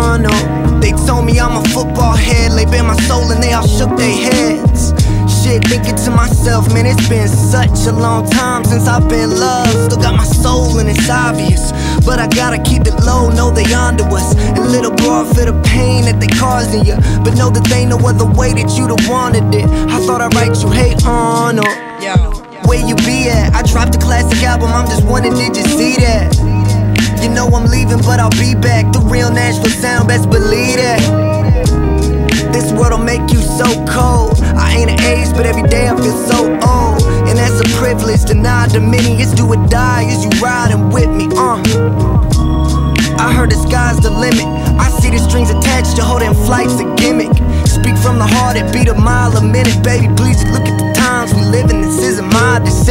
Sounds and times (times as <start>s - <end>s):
Pop music: 0.0s - 52.9s.